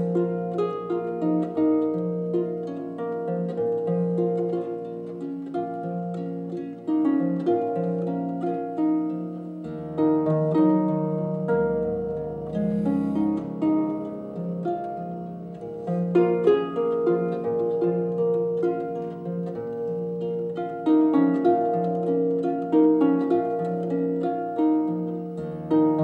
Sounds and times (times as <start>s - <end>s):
Harp: 0.0s - 26.0s.